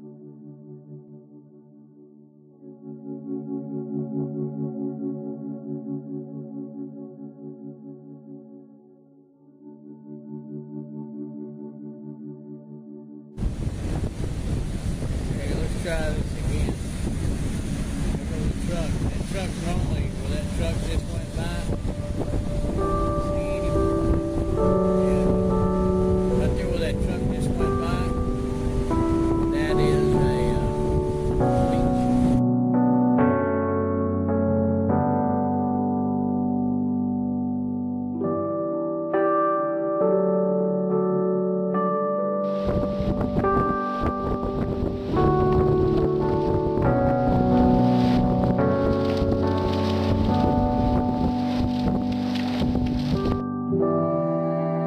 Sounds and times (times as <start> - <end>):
Music: 0.0 - 14.2, 15.0 - 16.8, 17.7 - 54.8
Speech: 15.4 - 16.8, 18.2 - 21.7, 23.2 - 23.8, 26.4 - 28.2, 29.5 - 30.8.